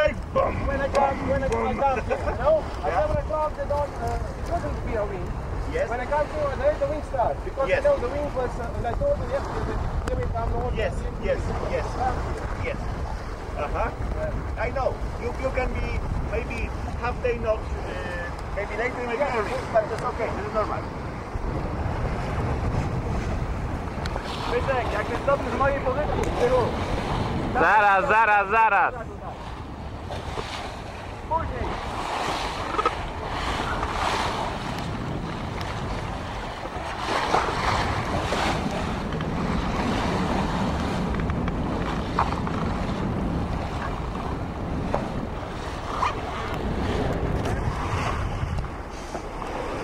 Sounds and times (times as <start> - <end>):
Wind noise (microphone): 0.0 - 28.2, 28.9 - 49.8
Ocean: 0.0 - 49.8
Sailboat, sailing ship: 0.0 - 49.8.